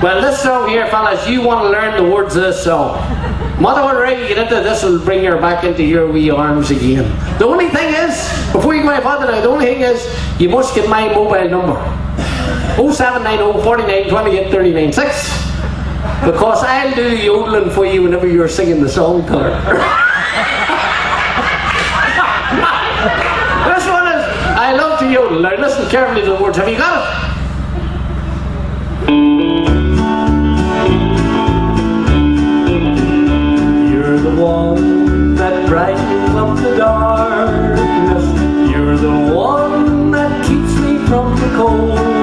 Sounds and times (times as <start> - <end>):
Speech: 0.0 - 3.0, 3.6 - 11.9, 12.8 - 15.5, 16.2 - 19.7, 23.6 - 27.3.